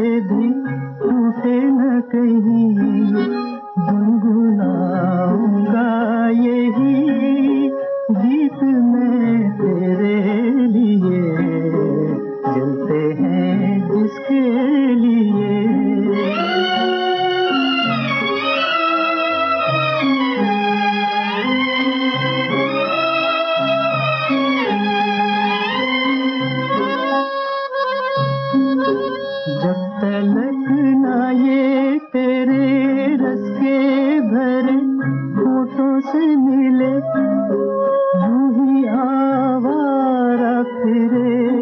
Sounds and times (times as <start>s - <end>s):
Wind instrument, woodwind instrument: 0.0s - 41.6s.